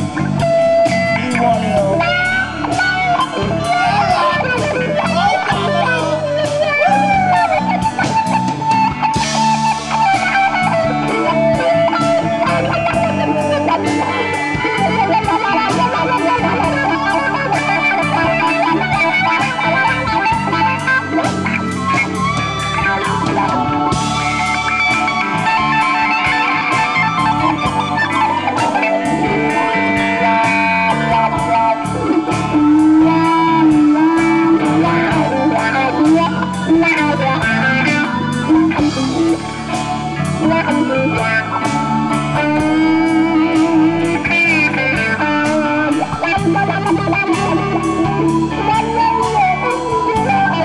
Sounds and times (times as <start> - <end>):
Bass guitar: 0.0 - 50.6.